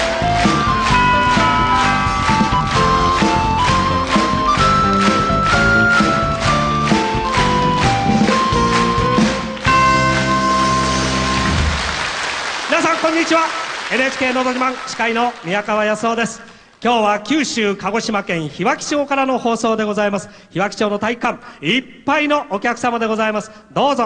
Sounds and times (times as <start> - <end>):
Speech: 12.7 - 24.0.